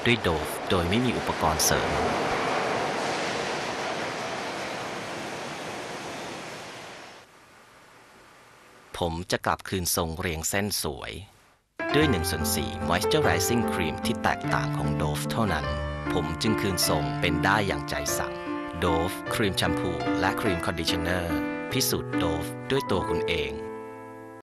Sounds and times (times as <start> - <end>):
Speech: 0.0 - 2.1, 9.0 - 23.7
Music: 11.8 - 24.4.